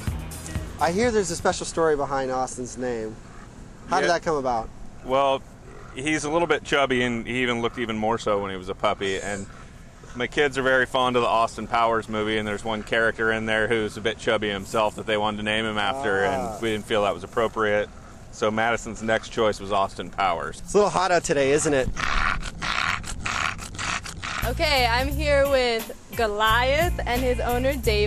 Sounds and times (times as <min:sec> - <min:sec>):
Speech: 0:00.8 - 0:03.2, 0:03.9 - 0:05.4, 0:10.2 - 0:21.9, 0:24.5 - 0:28.0.